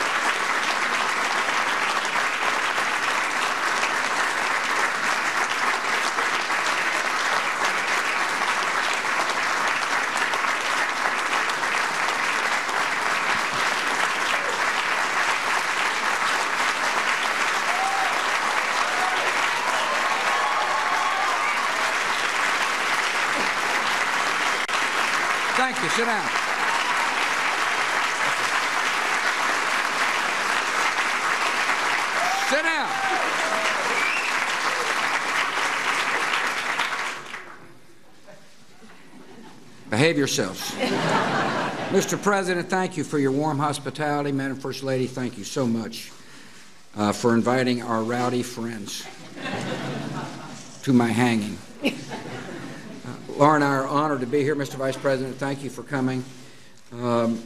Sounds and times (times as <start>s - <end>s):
Male speech, man speaking: 25.6s - 26.3s, 32.4s - 33.0s, 39.9s - 40.8s, 41.9s - 46.1s, 47.0s - 49.1s, 50.8s - 51.6s, 53.1s - 56.3s, 57.0s - 57.4s.